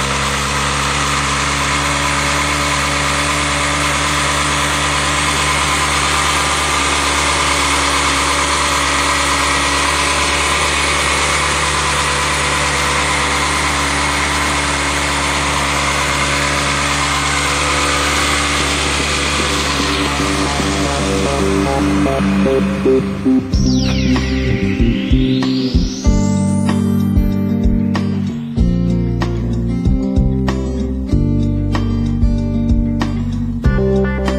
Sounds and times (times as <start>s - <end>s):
Vehicle: 0.0s - 24.8s
Engine: 0.0s - 34.3s.